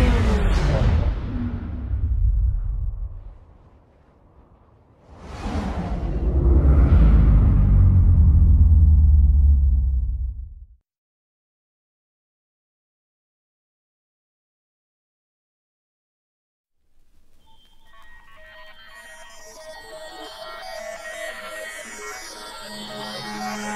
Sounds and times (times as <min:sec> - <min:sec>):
Outside, rural or natural: 0:00.0 - 0:10.8.